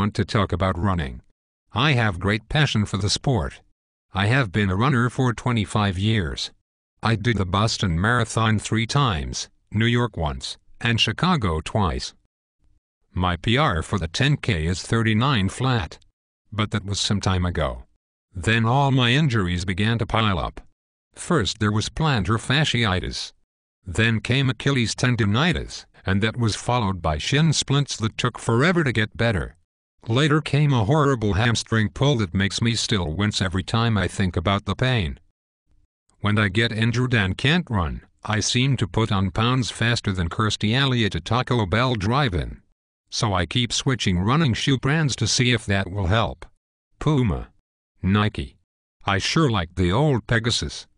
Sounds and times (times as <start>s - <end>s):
Speech: 0.0s - 12.2s, 13.1s - 35.2s, 36.2s - 50.9s.